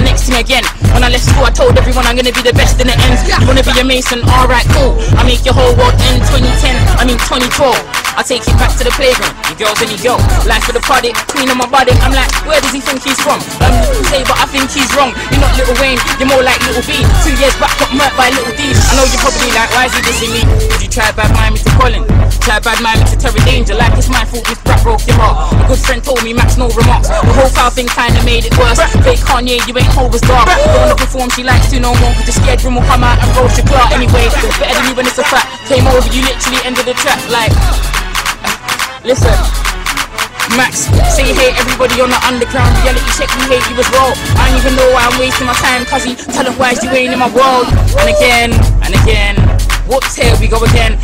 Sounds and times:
Music: 0:00.0 - 0:51.0.

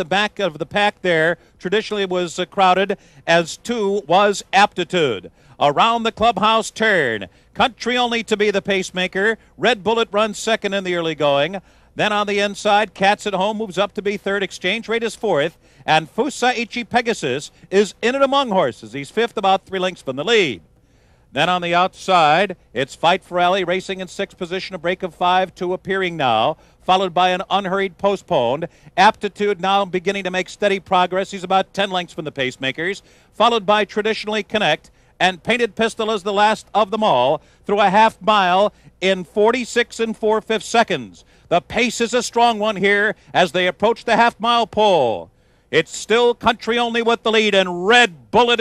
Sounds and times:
Speech: 0:00.0 - 0:20.6, 0:21.3 - 0:48.6.

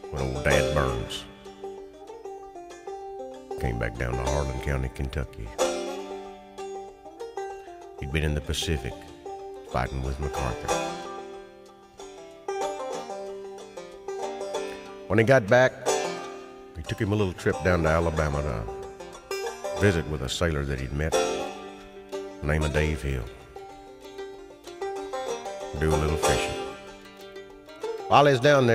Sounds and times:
Music: 0:00.0 - 0:28.7
Speech: 0:00.1 - 0:01.3, 0:03.6 - 0:05.6, 0:08.0 - 0:09.1, 0:09.7 - 0:10.8, 0:15.1 - 0:15.8, 0:16.8 - 0:18.8, 0:19.8 - 0:21.4, 0:22.4 - 0:23.4, 0:25.8 - 0:26.8, 0:28.1 - 0:28.7.

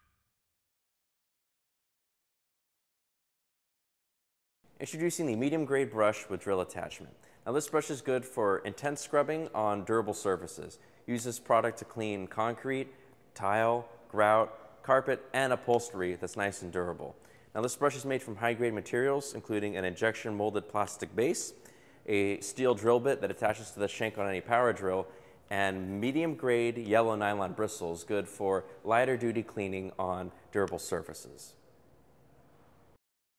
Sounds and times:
Speech: 0:04.8 - 0:31.6.

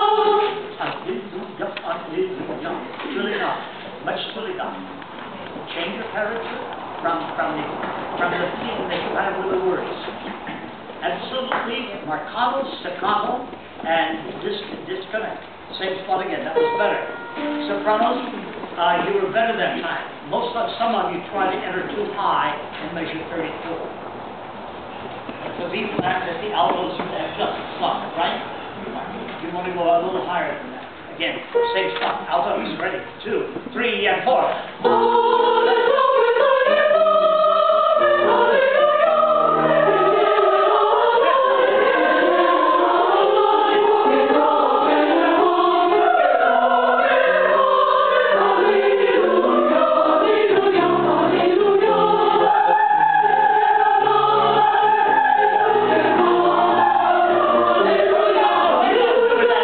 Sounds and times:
Music: 0:16.6 - 0:18.4, 0:34.8 - 0:59.6.

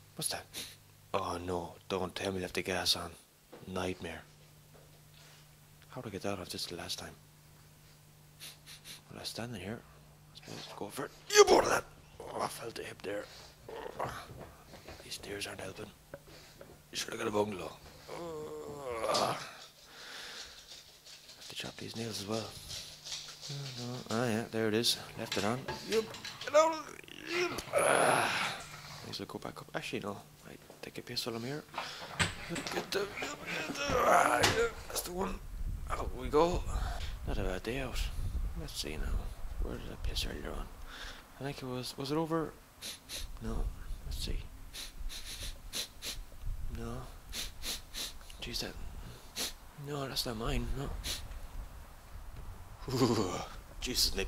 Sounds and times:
Speech: 0:00.2 - 0:04.3, 0:05.9 - 0:07.2, 0:09.1 - 0:09.8, 0:10.4 - 0:13.3, 0:15.0 - 0:16.0, 0:17.0 - 0:19.5, 0:21.5 - 0:22.6, 0:23.5 - 0:27.7, 0:29.0 - 0:31.7, 0:32.5 - 0:40.7, 0:41.4 - 0:42.6, 0:43.4 - 0:44.5, 0:48.4 - 0:48.8, 0:49.8 - 0:51.0, 0:52.9 - 0:54.2.

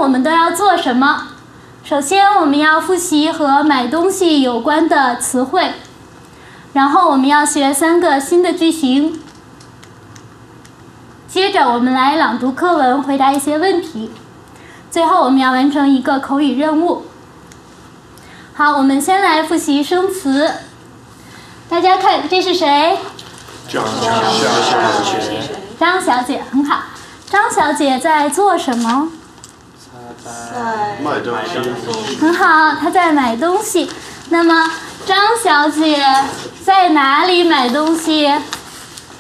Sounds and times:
Speech: 0:23.7 - 0:29.2, 0:29.8 - 0:38.5.

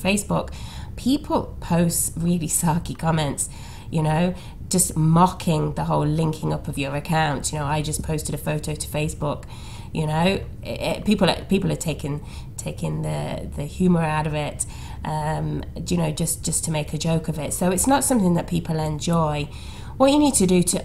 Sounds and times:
Speech: 0:00.0 - 0:20.8.

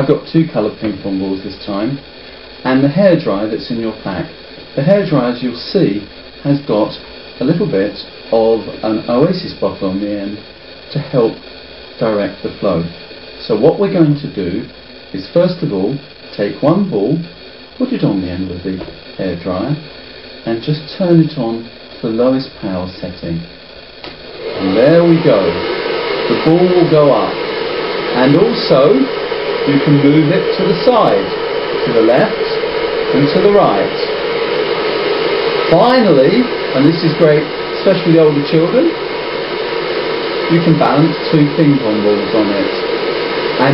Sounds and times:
Speech: 0:00.0 - 0:02.0, 0:02.6 - 0:11.4, 0:12.0 - 0:23.5, 0:24.6 - 0:25.6, 0:26.3 - 0:27.4, 0:28.1 - 0:34.1, 0:35.7 - 0:39.0, 0:40.5 - 0:42.9.

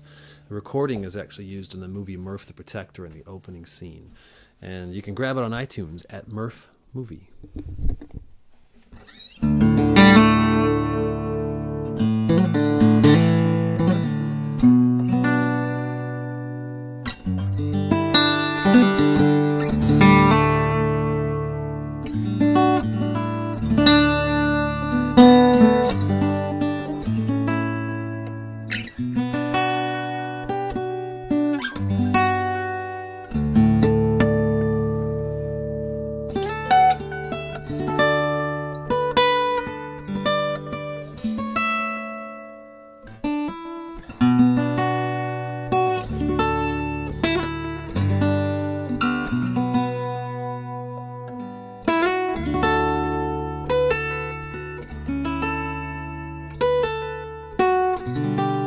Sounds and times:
Music: 0:08.9 - 0:58.6.

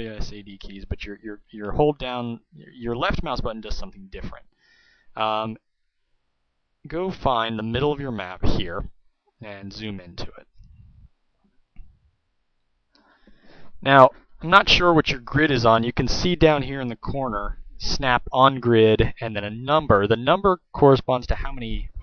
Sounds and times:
Speech: 0:00.0 - 0:04.5, 0:05.2 - 0:05.6, 0:06.9 - 0:10.5, 0:13.8 - 0:22.0.

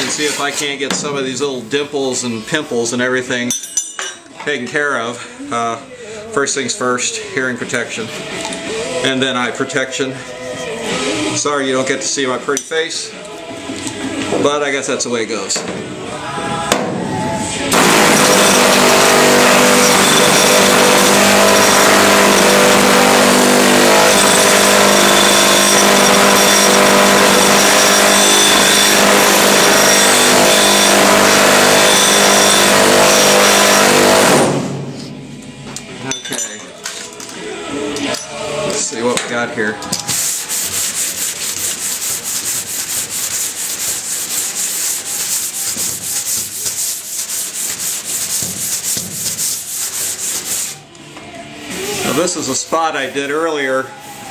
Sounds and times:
Filing (rasp): 0:00.0 - 0:00.8, 0:17.8 - 0:34.4, 0:40.1 - 0:50.8
Rub: 0:00.0 - 0:00.8, 0:40.1 - 0:50.8, 0:51.7 - 0:54.3.

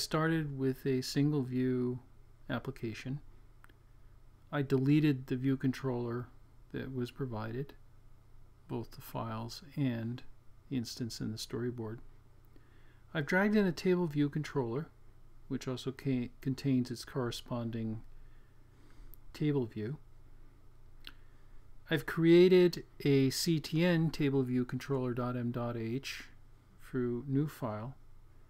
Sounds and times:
Speech: 0:00.0 - 0:03.3, 0:04.5 - 0:07.8, 0:08.7 - 0:12.1, 0:13.1 - 0:18.1, 0:19.3 - 0:20.1, 0:21.9 - 0:28.0.

